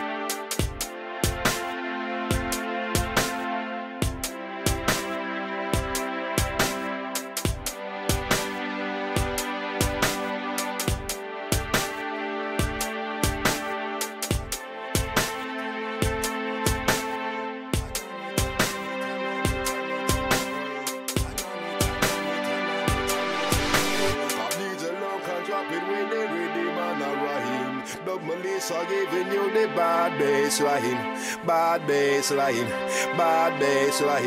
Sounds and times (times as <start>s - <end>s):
Music: 0.0s - 34.2s.